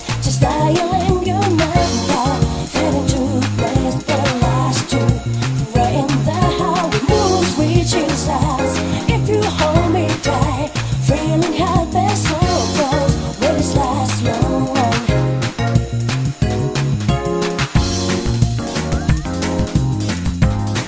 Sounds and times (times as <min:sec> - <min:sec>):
Music: 0:00.0 - 0:20.8.